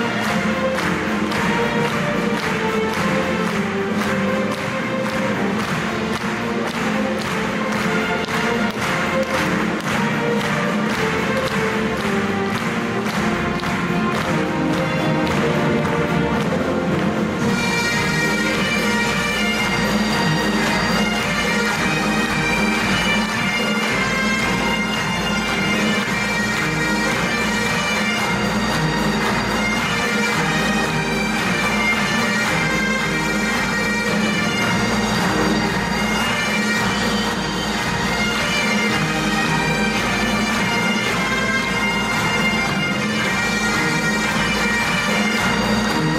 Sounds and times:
Orchestra: 0:00.0 - 0:46.1
Violin, fiddle: 0:00.0 - 0:46.1.

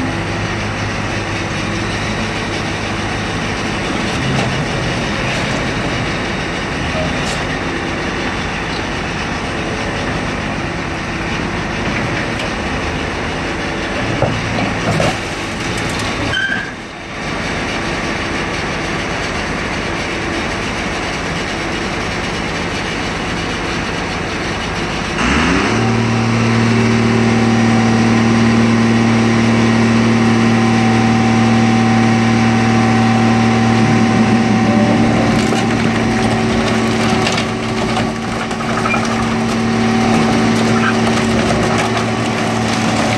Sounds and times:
Vehicle: 0:00.0 - 0:43.1.

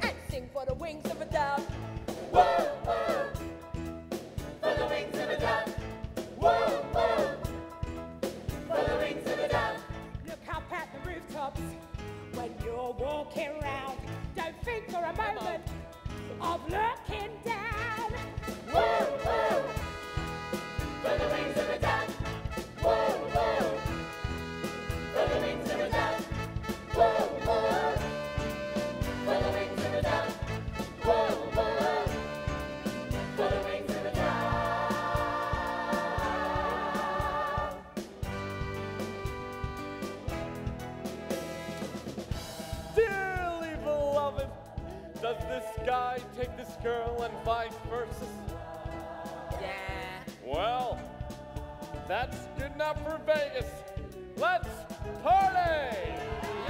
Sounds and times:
Music: 0:00.0 - 0:56.6.

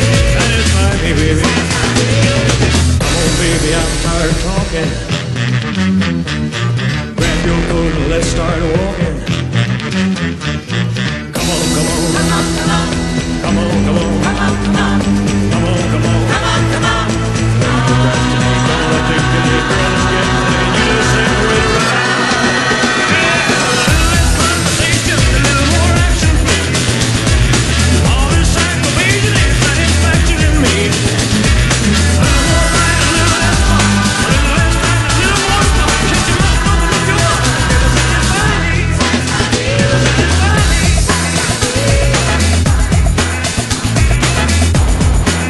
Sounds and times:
Music: 0:00.0 - 0:45.5.

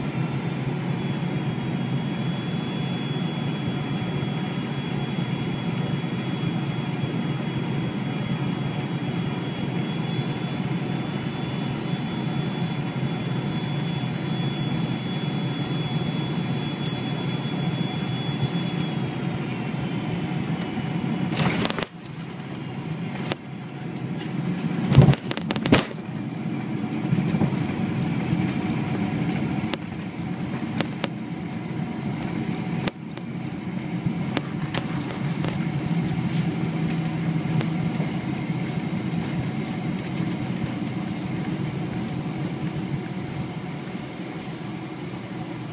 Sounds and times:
Outside, rural or natural: 0:00.0 - 0:45.7
Vehicle: 0:00.0 - 0:45.7.

